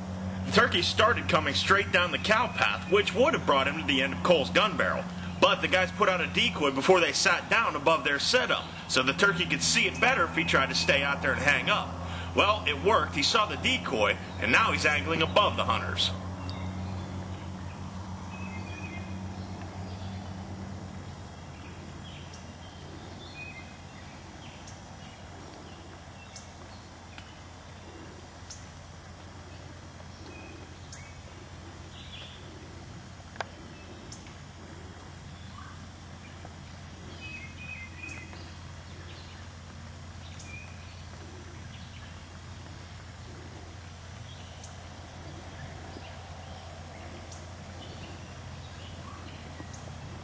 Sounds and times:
Speech: 0.4s - 16.2s
Bird: 0.4s - 50.2s.

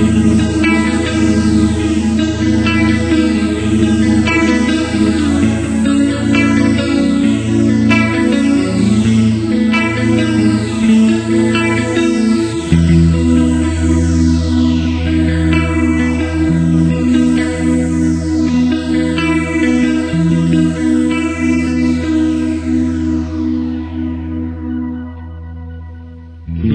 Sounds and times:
Electric guitar: 0.0s - 26.7s.

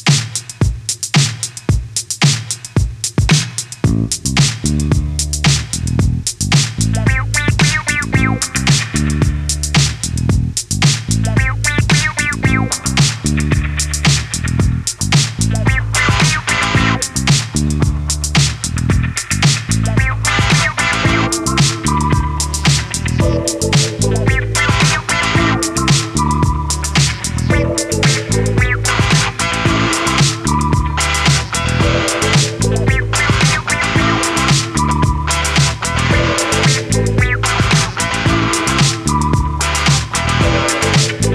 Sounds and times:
Music: 0.0s - 41.3s.

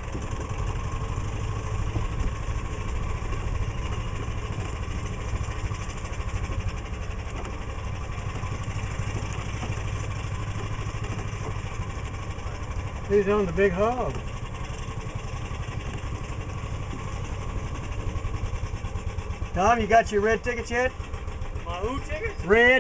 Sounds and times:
Vehicle: 0.0s - 22.8s
Speech: 13.1s - 14.2s, 19.6s - 21.0s, 21.6s - 22.8s.

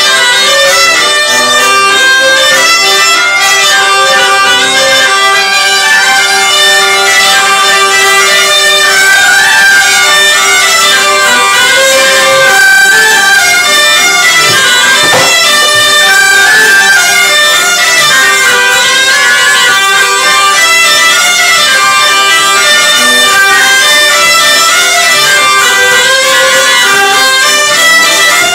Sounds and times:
Traditional music: 0.0s - 28.5s.

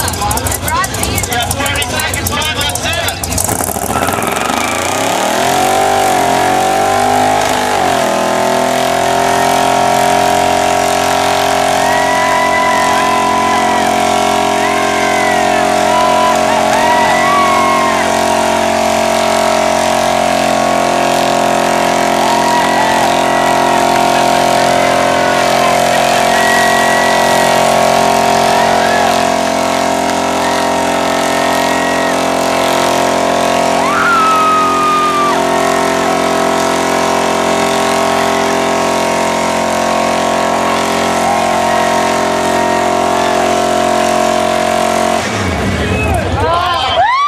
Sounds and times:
Vehicle: 0.0s - 47.2s.

